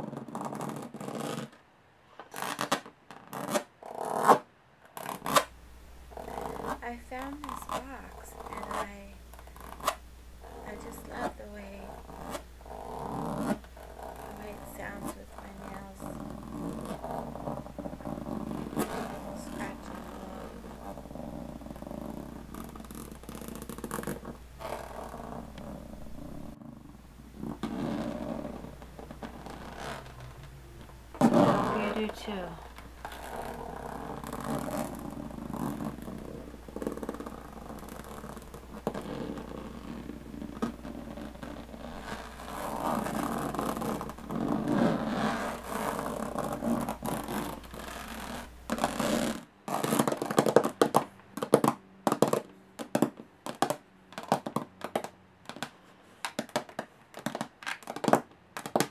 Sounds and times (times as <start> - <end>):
Scratch: 0.0 - 1.6, 2.2 - 5.5, 6.1 - 58.9
Speech: 6.8 - 9.2, 10.7 - 12.0, 14.3 - 16.2, 19.2 - 20.6, 31.6 - 32.7.